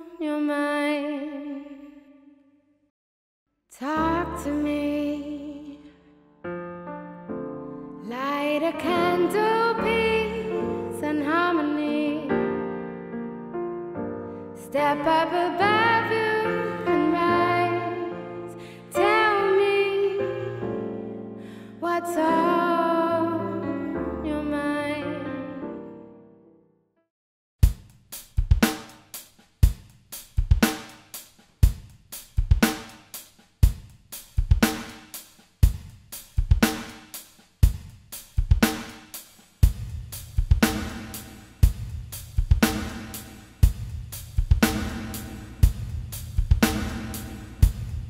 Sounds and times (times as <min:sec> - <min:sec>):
Piano: 0:03.8 - 0:26.8, 0:44.6 - 0:48.0.